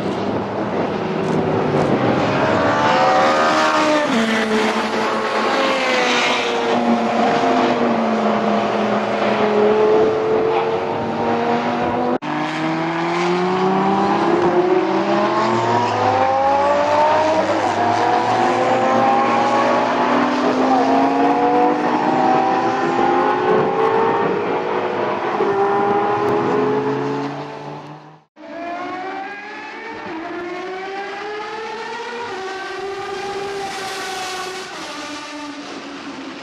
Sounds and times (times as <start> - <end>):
Outside, urban or manmade: 0.0 - 36.4
Race car, auto racing: 0.0 - 36.4.